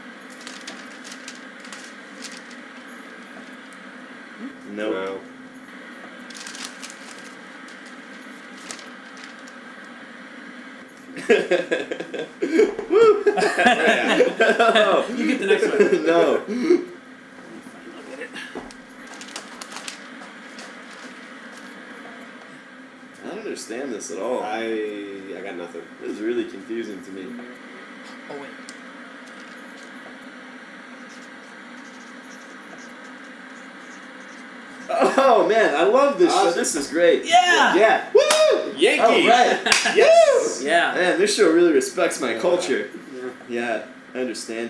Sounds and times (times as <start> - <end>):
Television: 0.0 - 44.6.